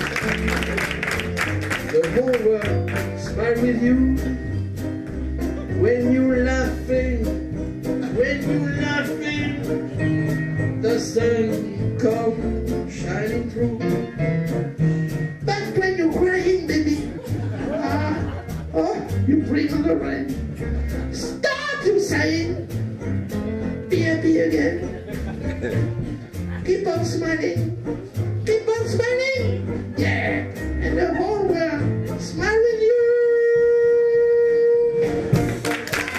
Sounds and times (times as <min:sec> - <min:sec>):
Brass instrument: 0:00.0 - 0:36.1
Jazz: 0:00.0 - 0:36.1
Speech: 0:28.5 - 0:34.8.